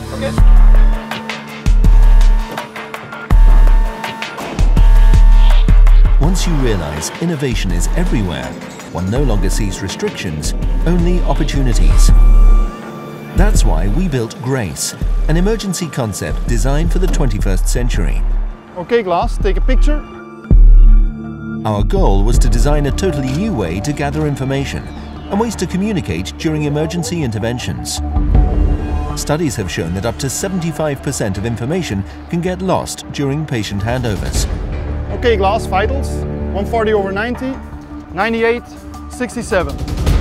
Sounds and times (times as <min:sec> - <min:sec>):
Music: 0:00.0 - 0:40.2
Speech: 0:06.2 - 0:12.2, 0:13.4 - 0:18.2, 0:18.8 - 0:20.1, 0:21.6 - 0:28.0, 0:29.1 - 0:34.5, 0:35.1 - 0:39.8.